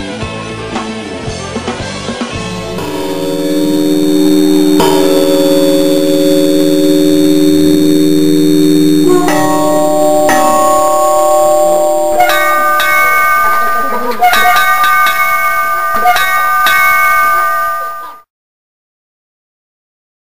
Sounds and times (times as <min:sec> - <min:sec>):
Bell: 0:02.5 - 0:18.3.